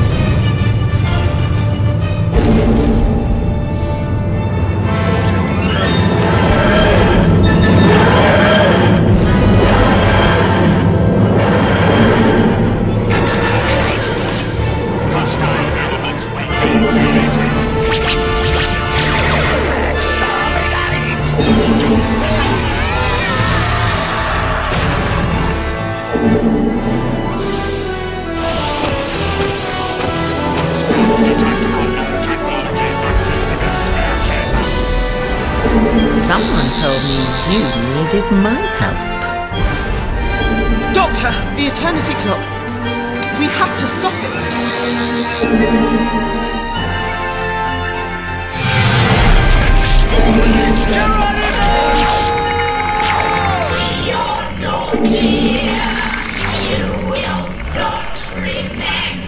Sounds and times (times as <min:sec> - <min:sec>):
Music: 0:00.0 - 0:59.2.